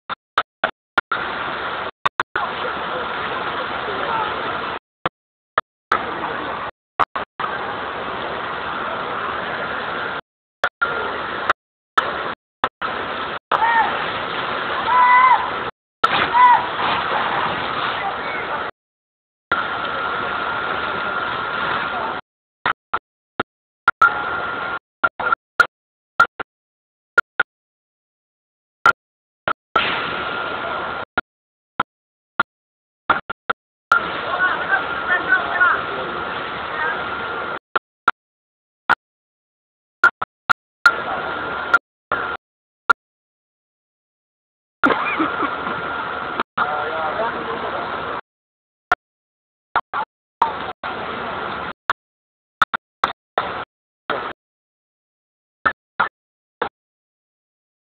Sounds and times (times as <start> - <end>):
Wind: 0.1 - 18.8, 19.5 - 26.4, 28.8 - 31.2, 33.1 - 38.2, 40.0 - 42.4, 44.8 - 48.3, 49.7 - 51.9.